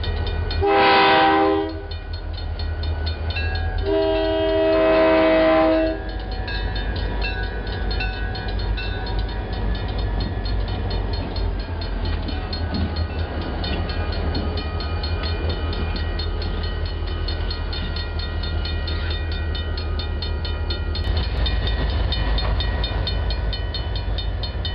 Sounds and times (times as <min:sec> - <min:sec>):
Outside, urban or manmade: 0:00.0 - 0:24.7
Railroad car, train wagon: 0:00.0 - 0:24.7
Train: 0:00.0 - 0:24.7.